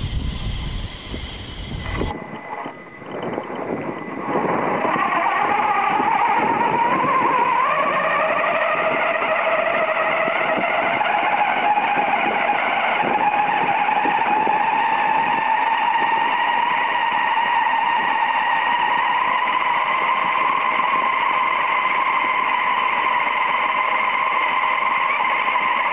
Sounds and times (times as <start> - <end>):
Vehicle: 0.0 - 25.9.